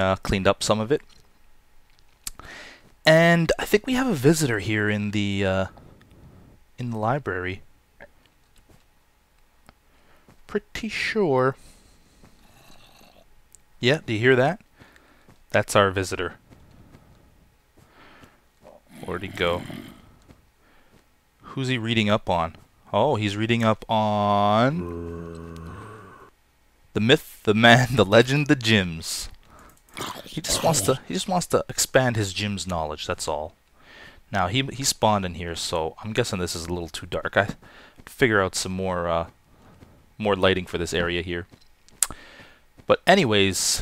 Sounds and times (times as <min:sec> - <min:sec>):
Speech: 0:00.0 - 0:01.1, 0:03.1 - 0:05.7, 0:06.8 - 0:07.6, 0:10.5 - 0:11.6, 0:13.8 - 0:14.6, 0:15.5 - 0:16.4, 0:18.7 - 0:19.8, 0:21.5 - 0:25.1, 0:27.0 - 0:29.4, 0:30.0 - 0:33.6, 0:34.3 - 0:39.3, 0:40.2 - 0:41.5, 0:42.9 - 0:43.8.